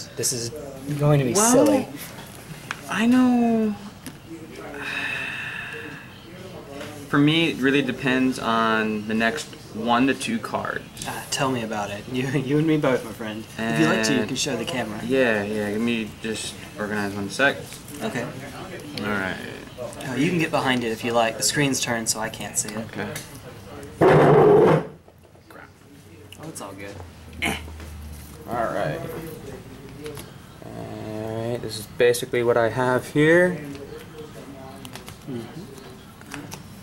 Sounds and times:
Speech: 0:00.1 - 0:02.0, 0:06.0 - 0:23.9.

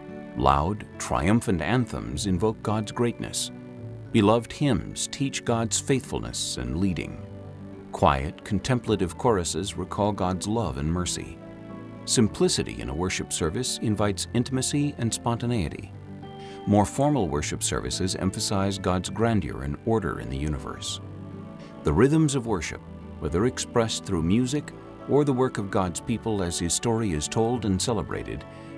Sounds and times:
Tender music: 0:00.0 - 0:28.7
Speech: 0:00.4 - 0:03.5, 0:04.1 - 0:07.2, 0:07.9 - 0:11.4, 0:12.1 - 0:15.9, 0:16.7 - 0:21.0, 0:21.8 - 0:28.4.

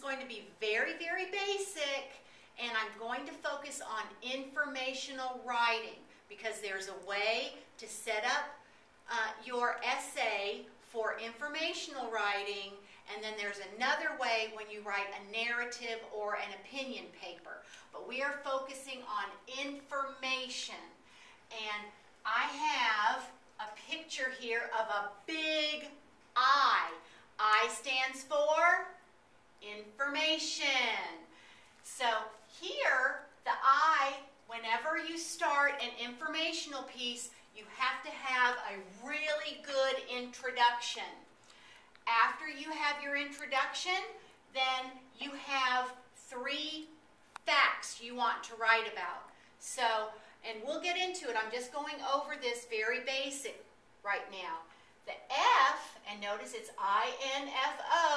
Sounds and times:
Speech: 0:00.0 - 0:20.9, 0:21.5 - 0:29.0, 0:29.6 - 0:31.3, 0:31.9 - 0:41.2, 0:42.0 - 0:58.1.

